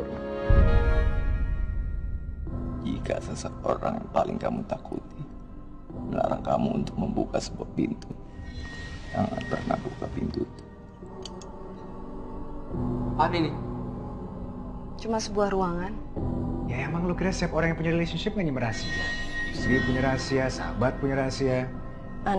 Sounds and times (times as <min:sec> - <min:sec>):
Music: 0:00.0 - 0:22.3
Speech: 0:02.9 - 0:05.2, 0:06.1 - 0:08.2, 0:09.2 - 0:10.5, 0:19.6 - 0:21.7.